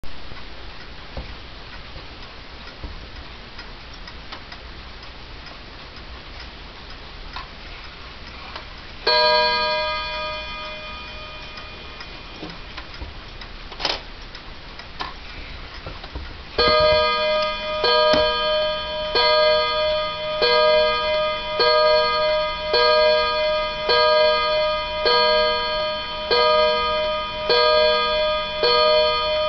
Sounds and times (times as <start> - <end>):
Clock: 0.0 - 29.4.